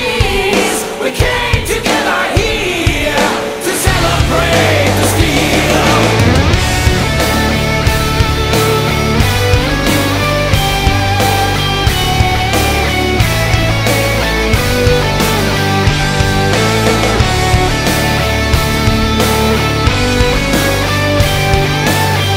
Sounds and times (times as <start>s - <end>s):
Music: 0.0s - 22.3s.